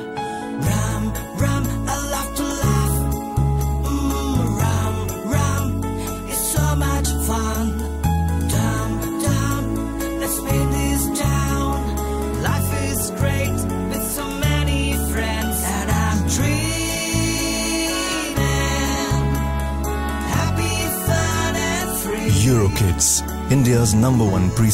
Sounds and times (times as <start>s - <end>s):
Music: 0.0s - 24.7s
Speech: 22.3s - 24.7s.